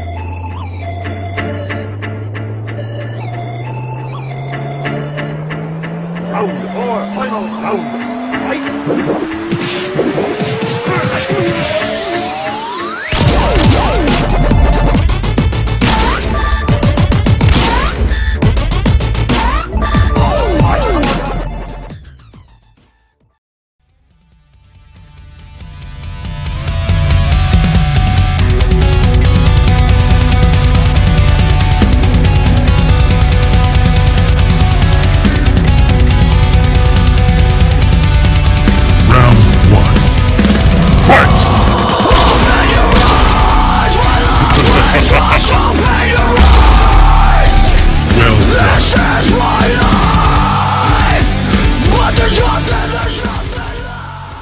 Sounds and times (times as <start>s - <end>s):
Dubstep: 6.3s - 16.4s, 42.0s - 49.4s.